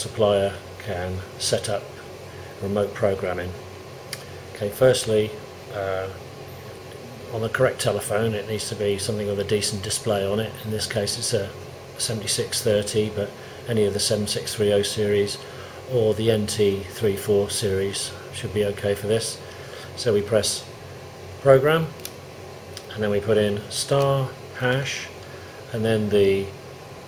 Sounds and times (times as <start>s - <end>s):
Speech: 0.0s - 2.0s, 2.6s - 3.6s, 4.5s - 6.2s, 7.0s - 19.4s, 20.0s - 20.7s, 21.4s - 22.0s, 22.8s - 26.6s.